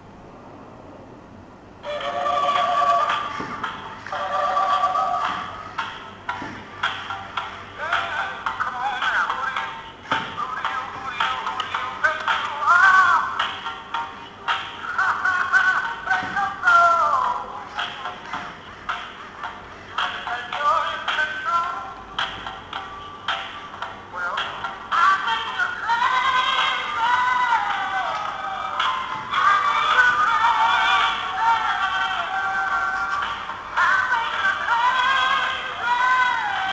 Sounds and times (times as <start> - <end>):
Music: 1.8 - 36.7.